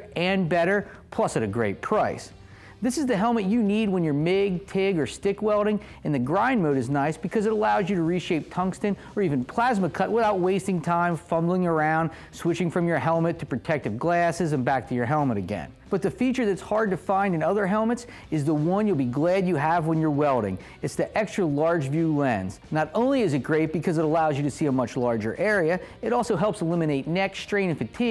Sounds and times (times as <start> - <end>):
Speech: 0.0 - 28.1.